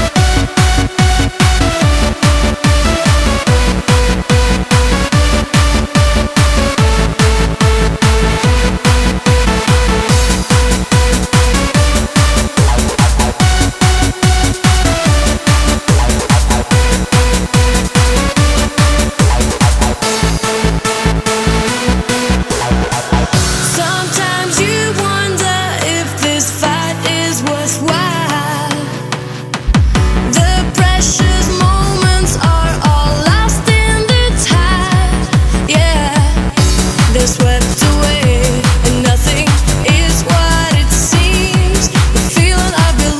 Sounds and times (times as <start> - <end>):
Techno: 0.0 - 43.1.